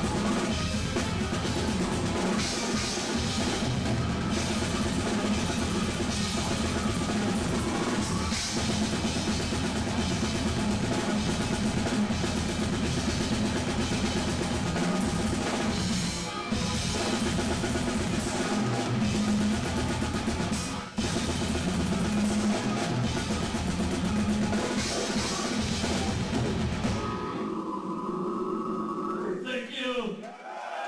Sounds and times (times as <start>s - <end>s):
Drum: 0.0s - 27.2s
Drum kit: 0.0s - 27.4s
Heavy metal: 0.0s - 29.1s
Speech: 29.2s - 30.3s.